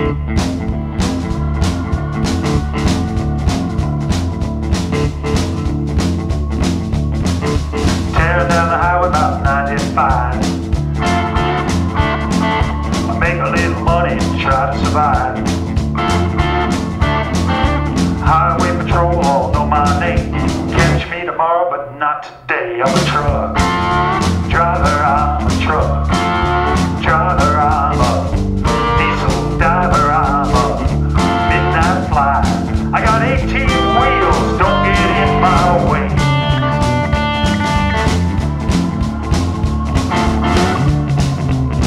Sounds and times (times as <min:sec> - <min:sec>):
Music: 0:00.0 - 0:21.4, 0:22.7 - 0:41.8.